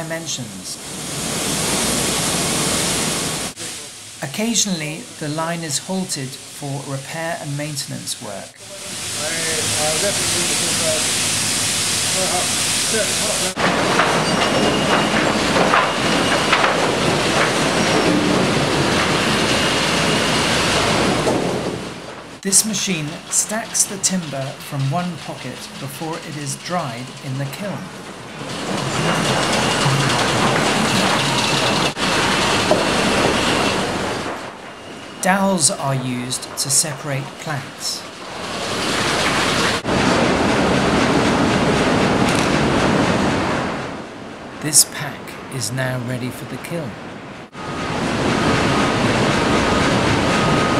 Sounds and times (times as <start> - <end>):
Speech: 0.0 - 0.8, 3.6 - 11.1, 12.2 - 13.6, 22.4 - 27.9, 35.2 - 38.0, 44.6 - 47.0
Wood: 13.6 - 22.0, 23.0 - 34.5.